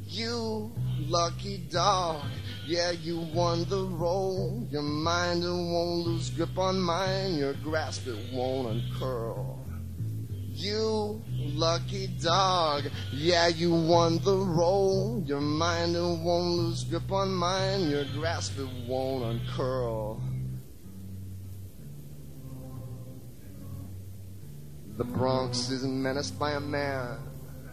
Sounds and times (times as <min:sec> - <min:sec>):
Music: 0:00.0 - 0:27.7.